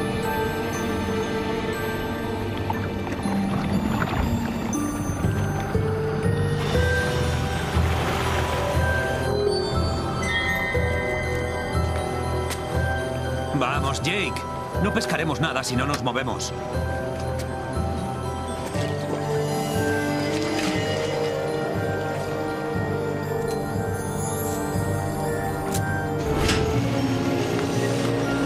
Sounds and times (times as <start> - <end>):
Stream: 0.0 - 11.2, 17.7 - 28.4
Music: 0.0 - 28.4
Speech: 13.6 - 16.5.